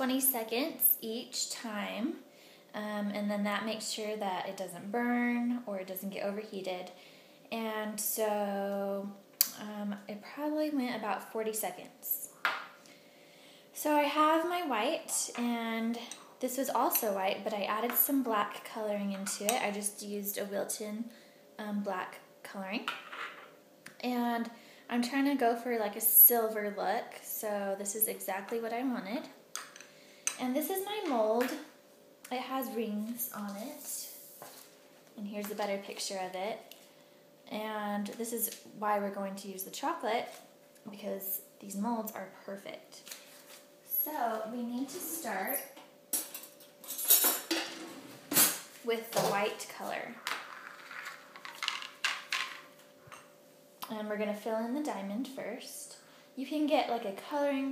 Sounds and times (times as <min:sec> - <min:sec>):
Speech: 0:00.0 - 0:02.2, 0:02.8 - 0:12.3, 0:13.8 - 0:22.9, 0:24.0 - 0:29.4, 0:30.4 - 0:31.7, 0:32.3 - 0:34.2, 0:35.2 - 0:36.7, 0:37.5 - 0:43.0, 0:43.9 - 0:45.8, 0:48.8 - 0:50.2, 0:53.8 - 0:57.7
Inside, small room: 0:00.0 - 0:57.7.